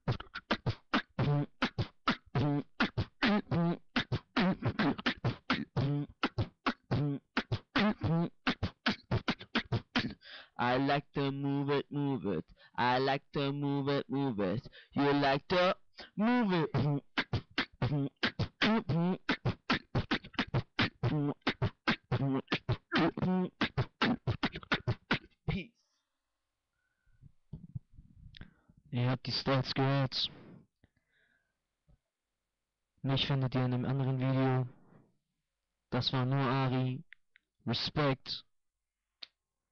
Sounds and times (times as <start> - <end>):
Beatboxing: 0.0 - 25.6, 36.0 - 37.1
Speech: 10.0 - 17.0, 22.2 - 23.6, 25.5 - 25.7, 28.9 - 30.4, 33.0 - 34.7, 36.0 - 37.1, 37.7 - 38.5.